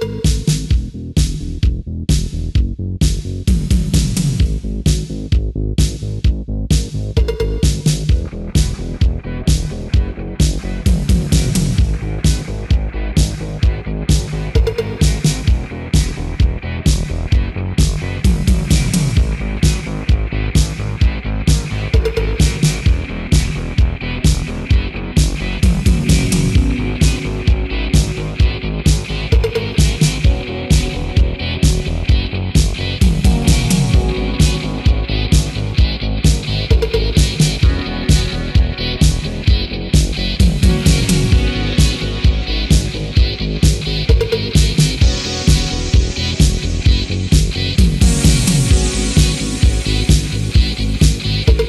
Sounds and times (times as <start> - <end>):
Music: 0.0 - 51.6.